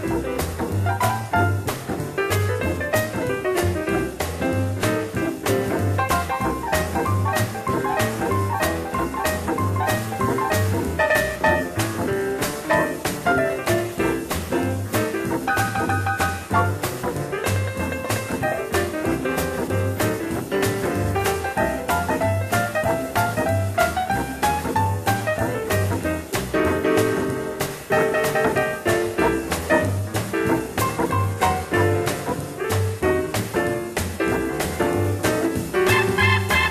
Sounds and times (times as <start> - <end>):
Music: 0.0 - 36.7.